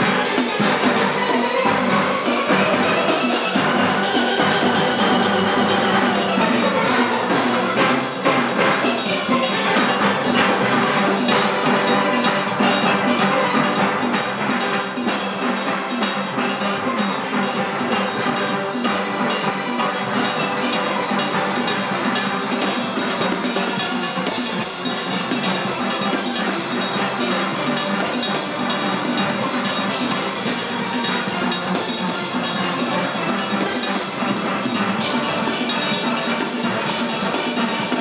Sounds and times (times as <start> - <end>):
Steelpan: 0.0 - 38.0.